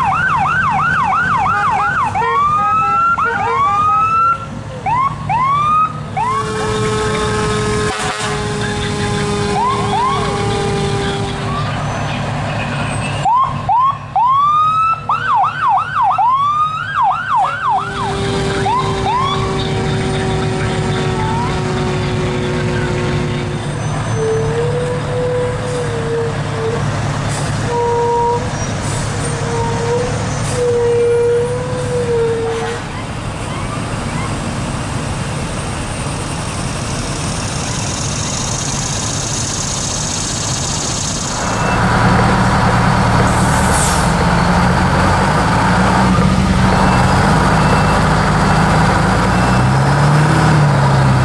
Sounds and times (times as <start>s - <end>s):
Truck: 0.0s - 51.2s.